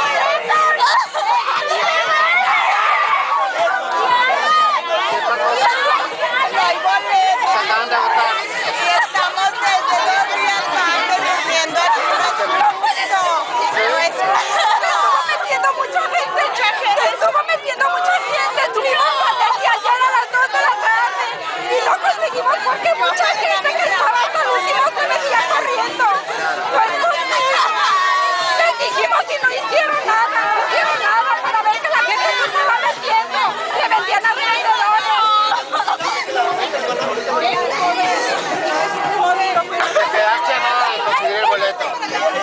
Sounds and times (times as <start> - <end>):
Speech: 0.0 - 42.4.